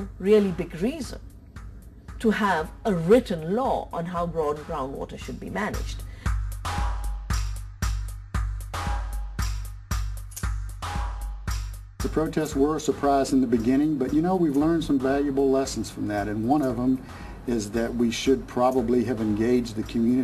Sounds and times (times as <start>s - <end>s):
Music: 0.0s - 20.2s
Speech: 2.2s - 5.9s.